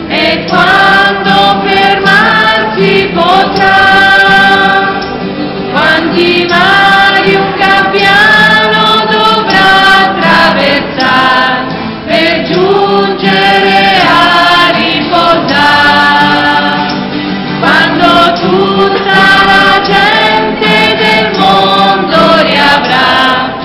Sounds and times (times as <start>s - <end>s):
Music: 0.0s - 23.6s.